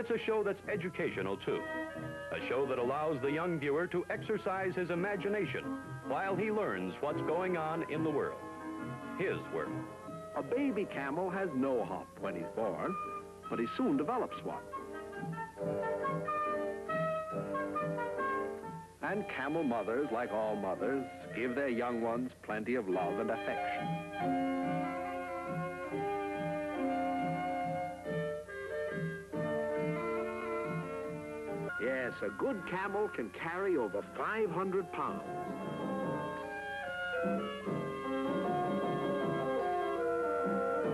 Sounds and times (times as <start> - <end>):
Speech: 0.0 - 1.6, 2.3 - 8.4, 9.2 - 9.8, 10.4 - 14.7, 19.0 - 23.8, 31.8 - 35.3
Music: 0.0 - 40.9.